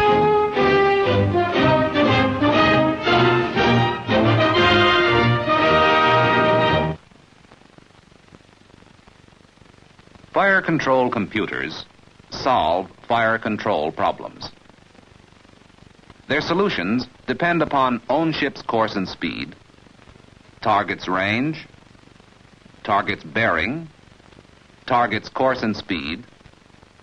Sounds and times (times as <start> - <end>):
Speech: 10.4 - 14.6, 16.3 - 19.6, 20.6 - 21.7, 22.8 - 24.0, 24.9 - 26.3.